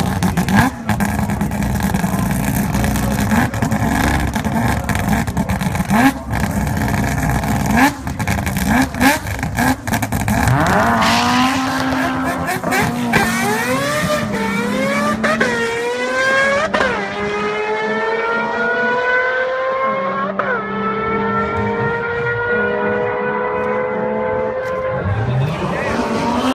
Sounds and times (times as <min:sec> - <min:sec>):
Car: 0:00.0 - 0:26.5.